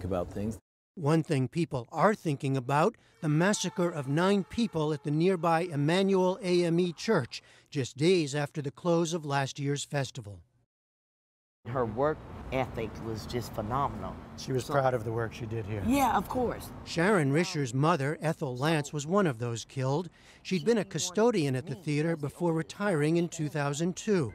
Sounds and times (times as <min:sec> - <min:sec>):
Speech: 0:00.0 - 0:10.4, 0:11.7 - 0:24.3.